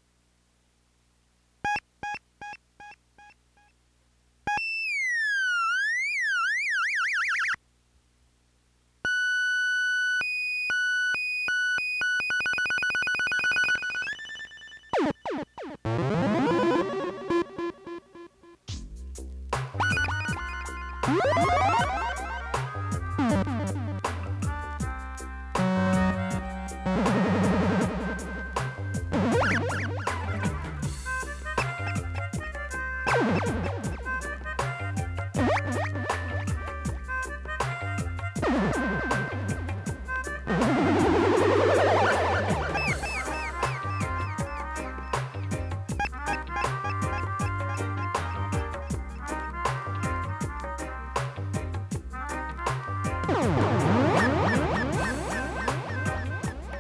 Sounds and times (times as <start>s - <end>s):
Music: 14.1s - 56.8s.